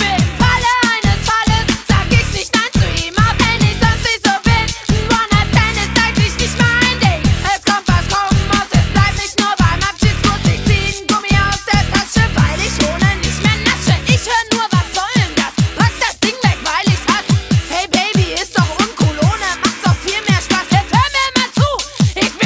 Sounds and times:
Dance music: 0:00.0 - 0:22.4.

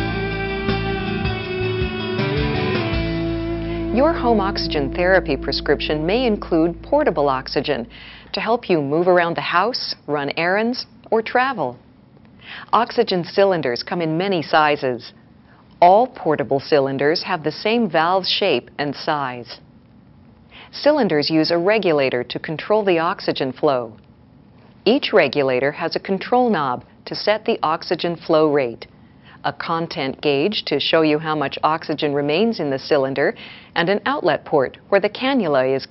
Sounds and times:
Speech: 0:03.9 - 0:11.8, 0:12.7 - 0:15.2, 0:15.8 - 0:19.7, 0:20.7 - 0:24.0, 0:24.8 - 0:35.9.

